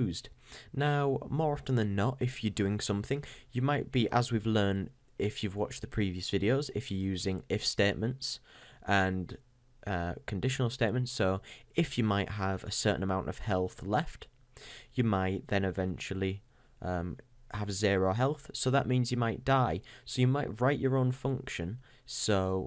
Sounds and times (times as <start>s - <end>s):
Speech: 0.0s - 14.3s, 14.9s - 22.6s.